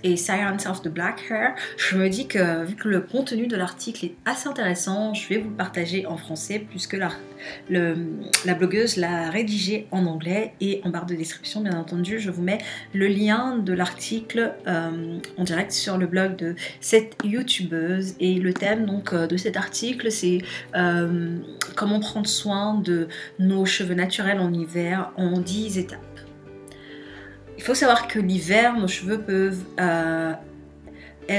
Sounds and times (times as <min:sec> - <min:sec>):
Speech: 0:00.0 - 0:26.2, 0:27.6 - 0:30.5
Music: 0:00.0 - 0:31.3.